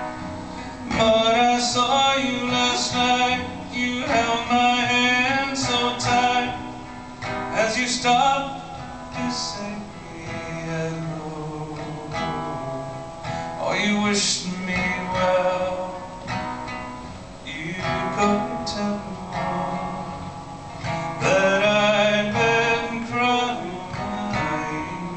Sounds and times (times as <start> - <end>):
Music: 0.0 - 25.1.